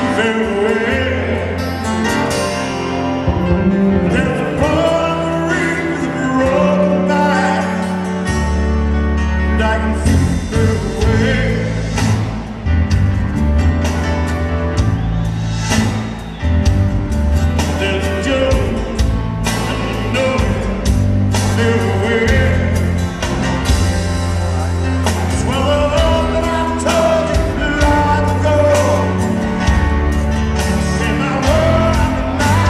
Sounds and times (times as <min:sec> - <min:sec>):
Music: 0:00.0 - 0:32.7.